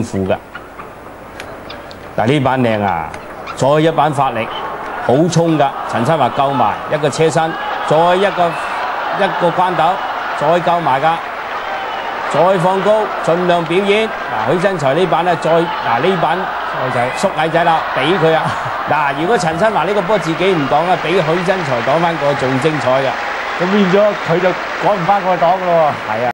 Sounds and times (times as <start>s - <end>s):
Speech: 0.0s - 0.4s, 2.2s - 8.6s, 9.2s - 11.2s, 12.3s - 26.3s.